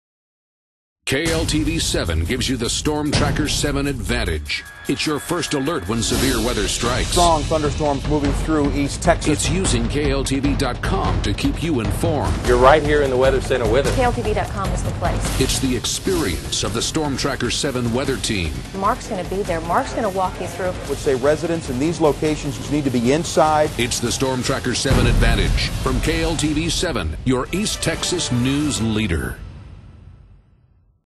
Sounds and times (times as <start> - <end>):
Speech: 1.1 - 29.4
Music: 1.1 - 31.0.